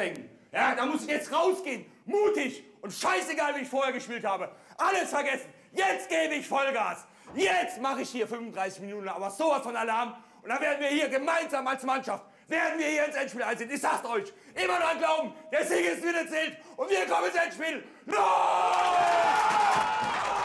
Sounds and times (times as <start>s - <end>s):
Speech: 0.0s - 17.9s.